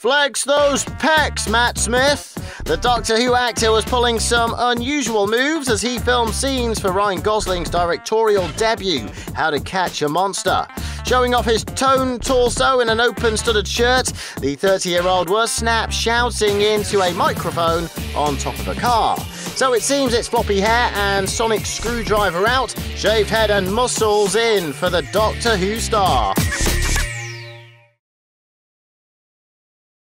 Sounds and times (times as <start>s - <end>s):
Speech: 0.0s - 26.4s
Music: 0.5s - 28.0s.